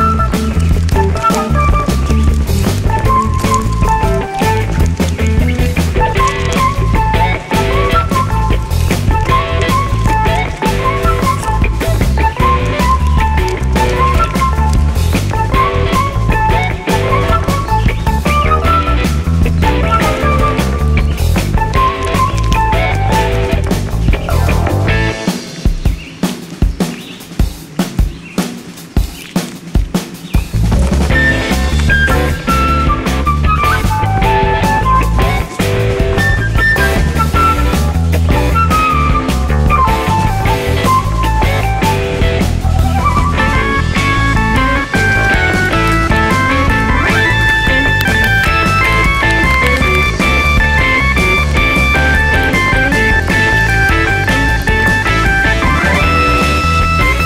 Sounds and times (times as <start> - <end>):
Chirp, tweet: 25.8 - 27.3.